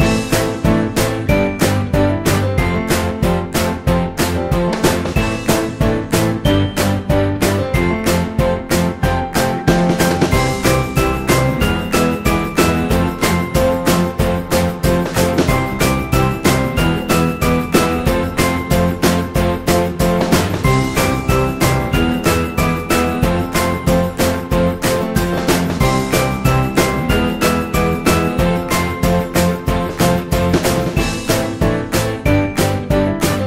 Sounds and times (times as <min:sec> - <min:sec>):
Music: 0:00.0 - 0:33.4.